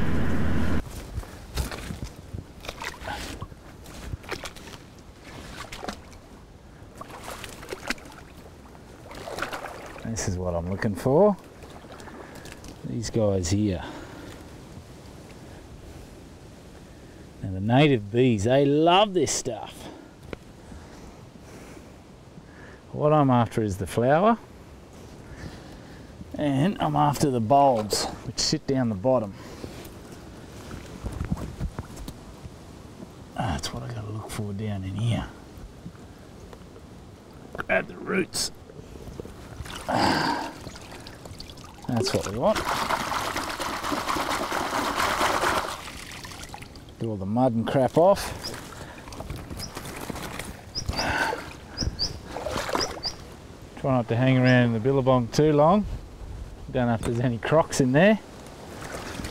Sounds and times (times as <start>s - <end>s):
Trickle, dribble: 39.5s - 47.1s.